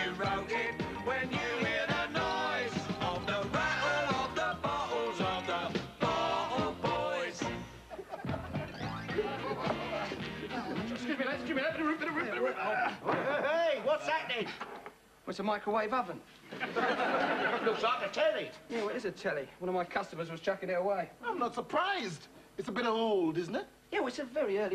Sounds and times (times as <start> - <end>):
Music: 0.0 - 12.2.